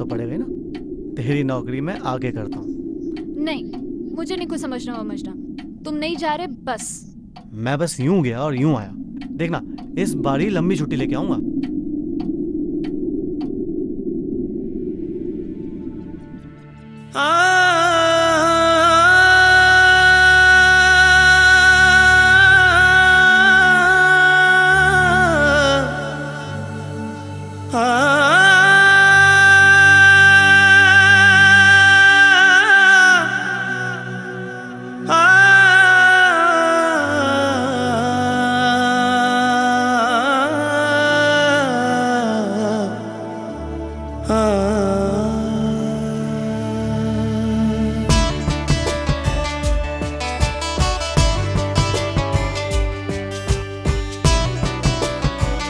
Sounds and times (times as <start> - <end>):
Speech: 0.0 - 0.5, 1.2 - 2.6, 3.4 - 3.6, 4.2 - 11.4
Music: 15.6 - 55.6.